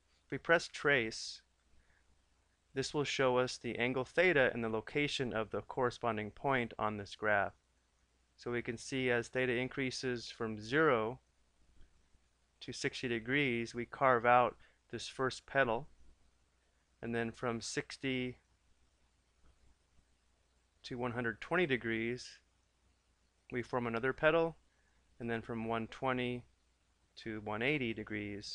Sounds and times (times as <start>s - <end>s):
Speech: 0.3s - 1.5s, 2.8s - 7.6s, 8.4s - 11.2s, 12.6s - 15.9s, 17.0s - 18.5s, 20.8s - 22.5s, 23.5s - 24.6s, 25.2s - 26.5s, 27.2s - 28.5s.